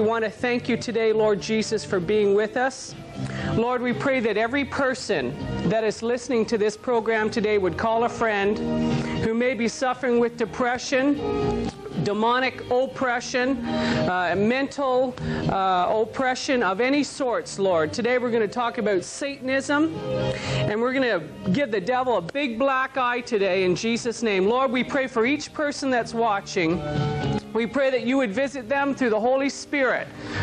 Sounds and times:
Speech: 0.0s - 2.9s, 3.6s - 8.6s, 12.0s - 19.9s, 20.7s - 26.8s, 27.6s - 30.1s
Music: 0.0s - 30.4s.

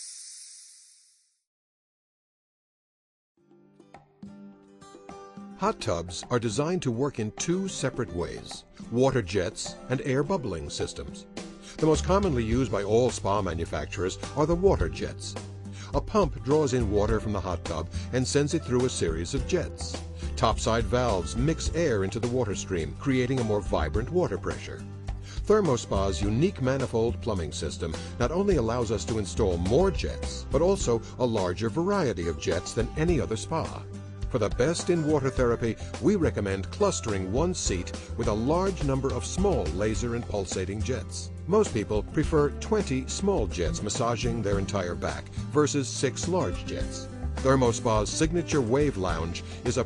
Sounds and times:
Music: 3.4s - 49.8s
Speech: 5.6s - 24.8s, 25.4s - 49.8s.

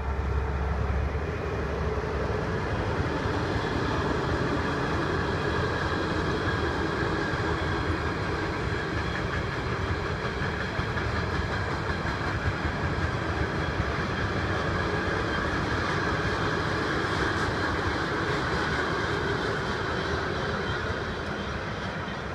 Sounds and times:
Railroad car, train wagon: 0.0s - 22.3s
Train: 0.0s - 22.3s.

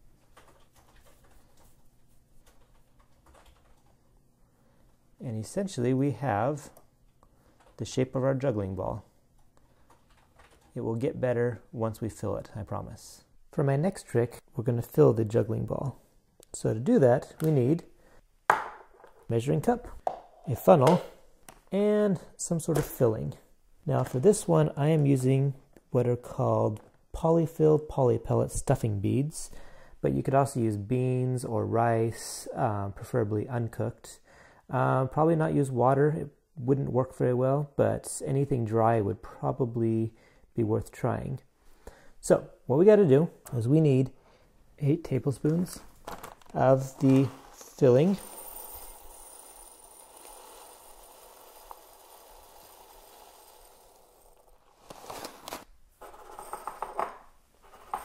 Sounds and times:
Speech: 5.2s - 6.8s, 7.8s - 9.1s, 10.7s - 17.9s, 19.3s - 41.5s, 42.2s - 44.2s, 44.8s - 45.9s, 46.5s - 48.3s.

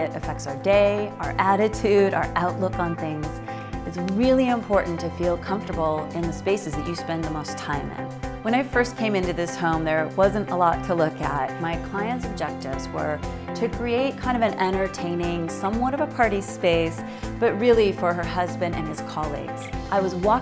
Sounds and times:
Music: 0.0s - 20.4s
Speech: 0.0s - 20.4s.

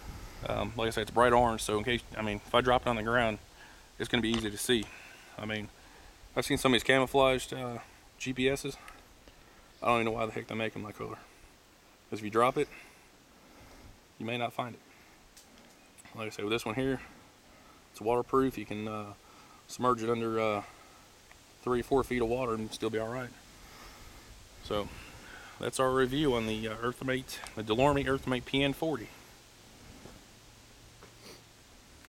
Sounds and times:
Outside, rural or natural: 0.0s - 32.1s
Speech: 0.4s - 3.4s, 4.0s - 5.7s, 6.4s - 8.8s, 9.8s - 11.3s, 12.1s - 12.7s, 14.2s - 14.8s, 16.1s - 17.1s, 18.0s - 20.7s, 21.6s - 23.4s, 24.6s - 25.0s, 25.6s - 29.2s.

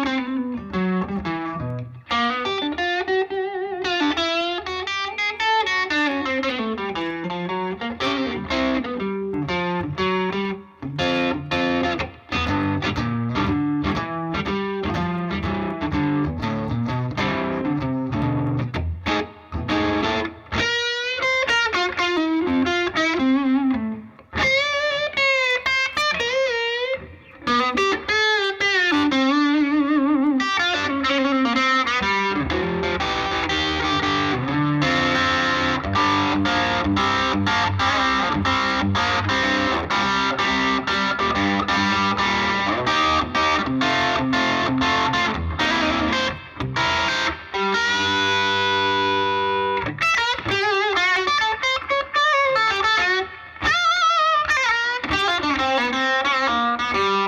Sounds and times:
Electric guitar: 0.0s - 57.2s.

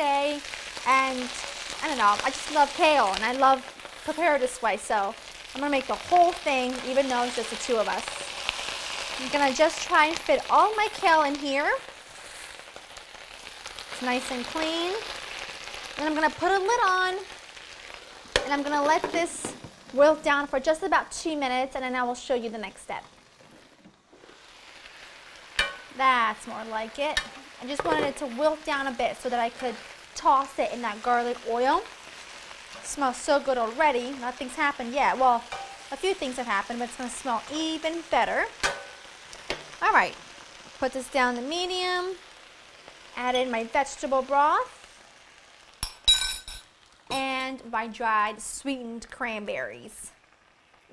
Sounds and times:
Frying (food): 0.0s - 50.9s
Sizzle: 0.0s - 50.9s.

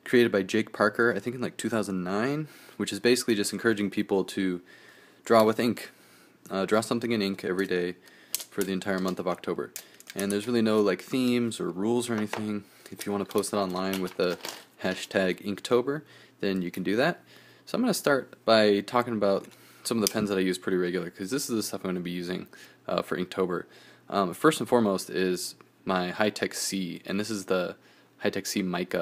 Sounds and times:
Speech: 0.0s - 4.7s, 5.3s - 29.0s.

